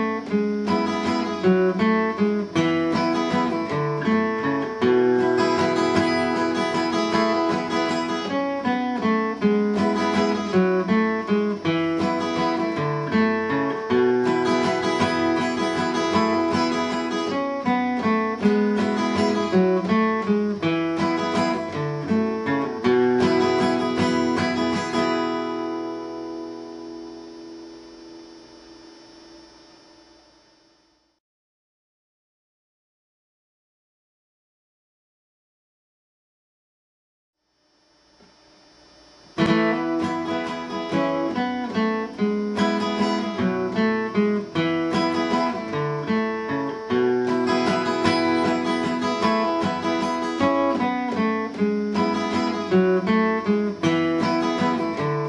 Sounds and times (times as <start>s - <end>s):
Acoustic guitar: 0.0s - 30.5s, 38.3s - 55.2s.